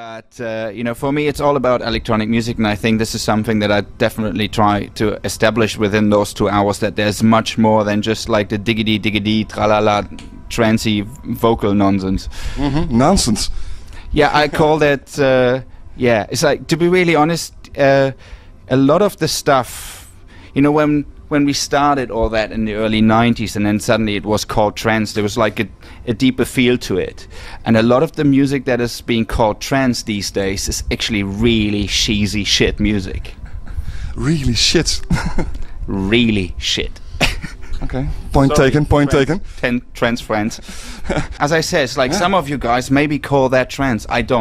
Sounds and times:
Speech: 0:00.0 - 0:13.5, 0:14.1 - 0:20.0, 0:20.6 - 0:33.4, 0:34.1 - 0:35.2, 0:35.9 - 0:37.0, 0:37.8 - 0:44.4.

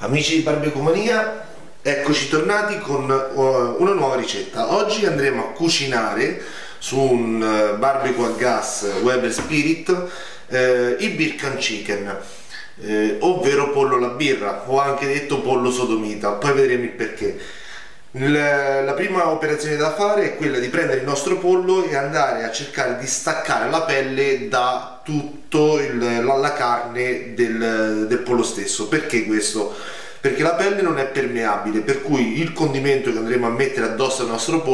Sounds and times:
Speech: 0:00.0 - 0:17.4, 0:18.1 - 0:34.7.

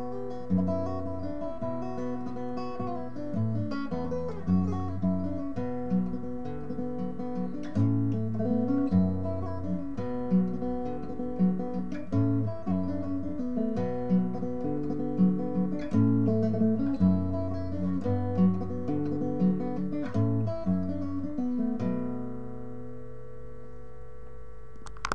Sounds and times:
Guitar: 0:00.0 - 0:25.1.

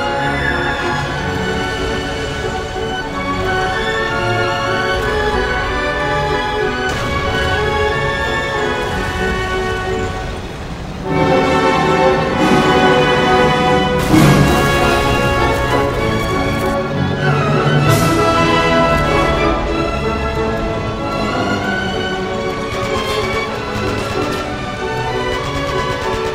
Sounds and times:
Music: 0:00.0 - 0:26.3.

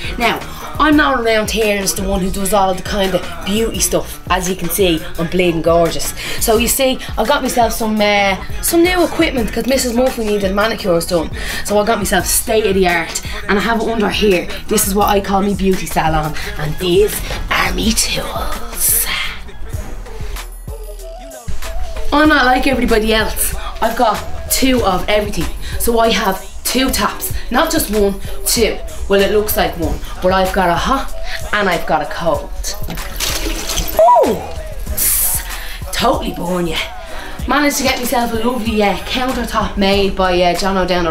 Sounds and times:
Music: 0:00.0 - 0:41.1
Speech: 0:00.1 - 0:19.4, 0:22.1 - 0:32.9, 0:34.0 - 0:41.1.

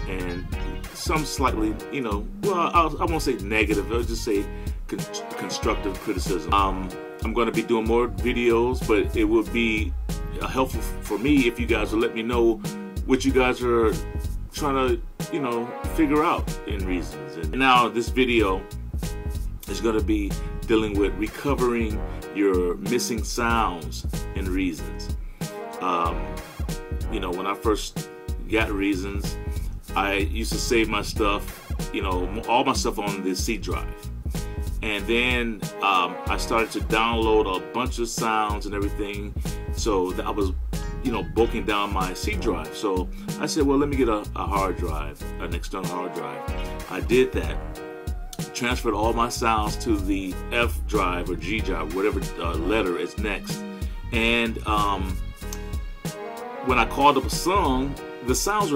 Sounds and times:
Speech: 0:00.0 - 0:18.7, 0:19.6 - 0:25.1, 0:25.8 - 0:26.4, 0:27.0 - 0:34.0, 0:34.8 - 0:47.8, 0:48.4 - 0:55.2, 0:56.6 - 0:58.7
Music: 0:00.0 - 0:58.7.

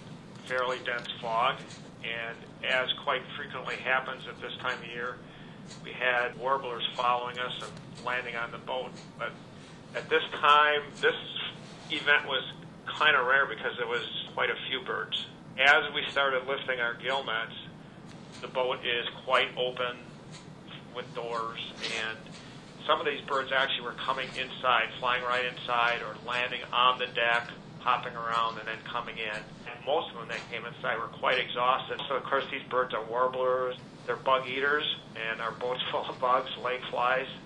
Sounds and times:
Speech: 0:00.4 - 0:05.2, 0:05.8 - 0:09.4, 0:10.0 - 0:17.7, 0:18.4 - 0:20.1, 0:20.7 - 0:37.4.

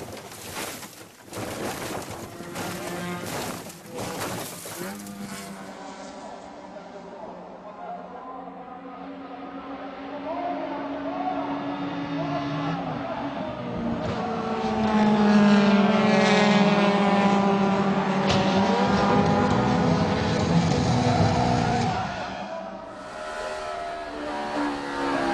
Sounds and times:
Speech: 0:05.8 - 0:14.5.

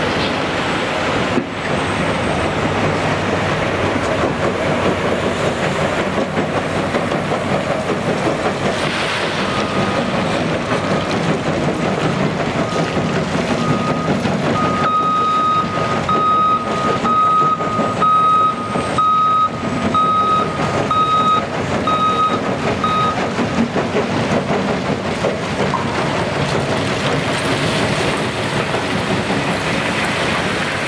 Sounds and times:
Outside, urban or manmade: 0:00.0 - 0:30.8
Truck: 0:00.0 - 0:30.8.

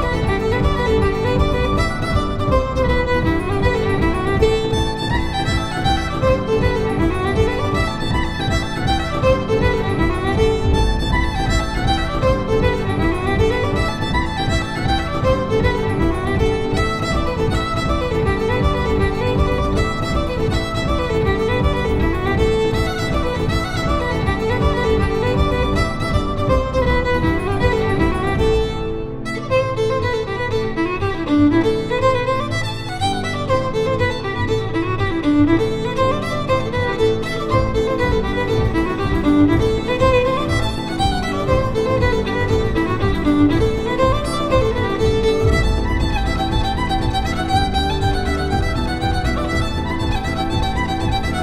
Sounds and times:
Violin, fiddle: 0:00.0 - 0:51.4.

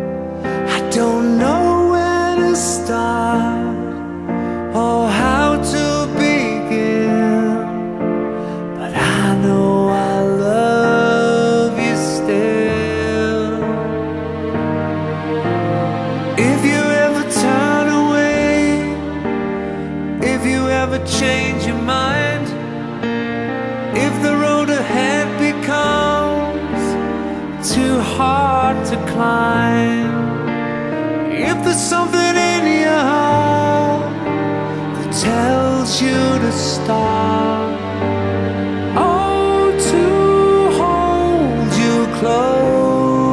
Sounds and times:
Sad music: 0:00.0 - 0:43.3.

